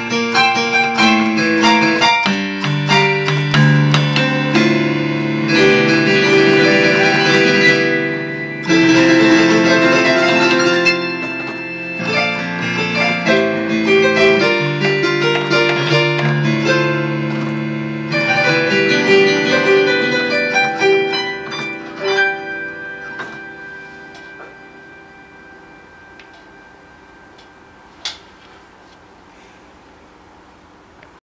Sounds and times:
Electric piano: 0.0 - 28.4.

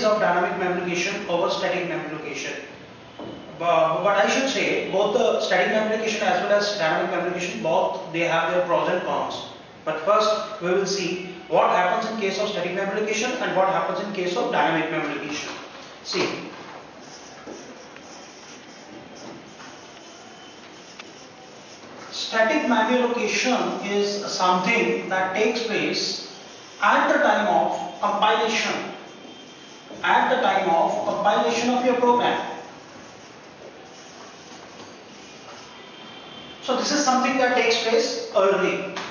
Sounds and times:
Speech: 0.0 - 2.7, 3.6 - 16.6, 22.1 - 28.9, 30.0 - 32.6, 36.6 - 39.0.

